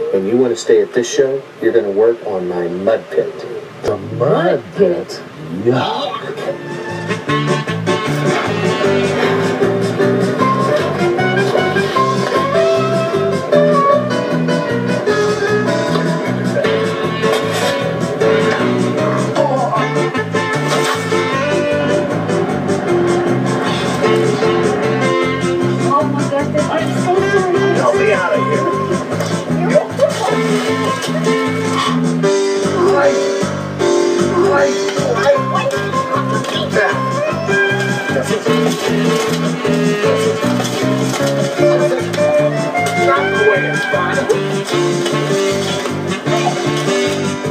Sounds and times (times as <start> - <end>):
Speech: 0.0 - 6.4, 29.6 - 30.4
Music: 6.1 - 47.5.